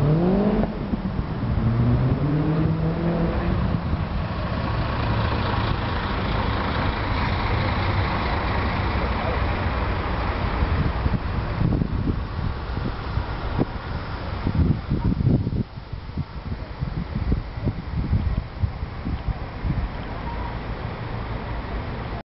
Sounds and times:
Outside, urban or manmade: 0.0s - 22.2s.

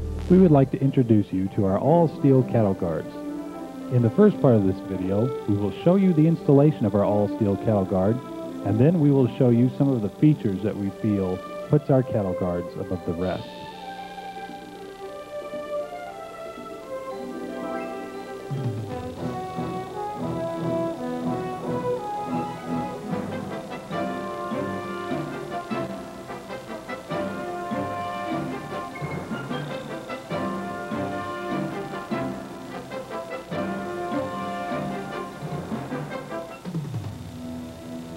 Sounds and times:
Music: 0.0s - 38.1s.

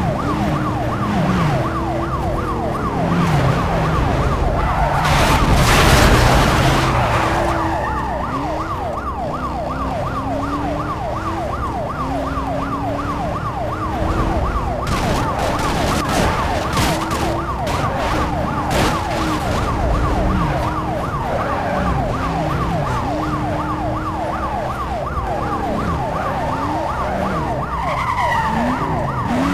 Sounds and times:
Car: 0.0s - 29.5s
Police car (siren): 0.0s - 29.5s.

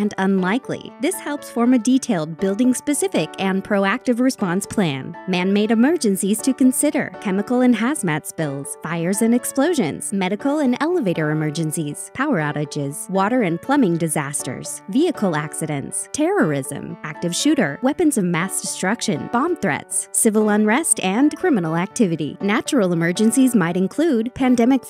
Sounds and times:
Music: 0.0s - 24.9s
Speech: 0.0s - 24.9s.

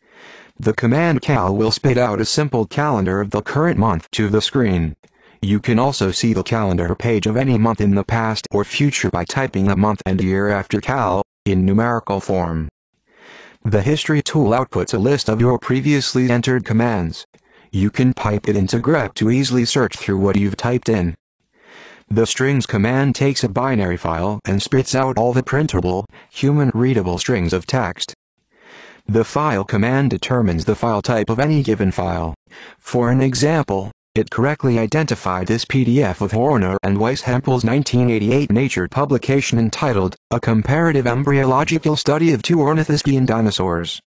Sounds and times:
Speech: 0.6s - 12.7s, 13.6s - 21.2s, 22.1s - 28.2s, 29.1s - 44.0s.

